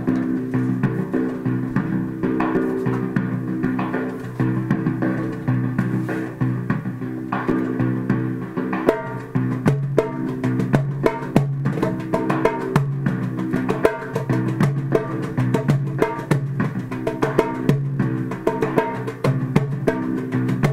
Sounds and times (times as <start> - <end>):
Percussion: 0.0 - 20.7.